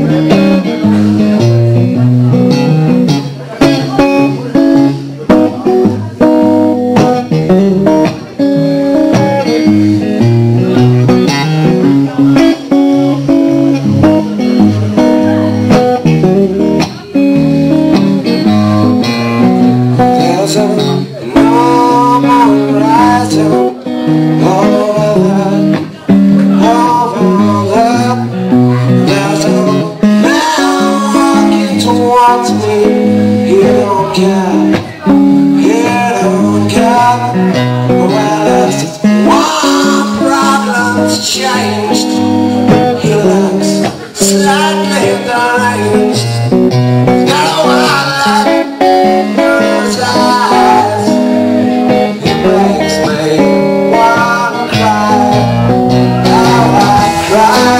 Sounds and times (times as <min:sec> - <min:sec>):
Speech: 0:00.0 - 0:09.6, 0:10.4 - 0:19.2, 0:19.9 - 0:46.4, 0:52.1 - 0:57.8
Music: 0:00.0 - 0:57.8.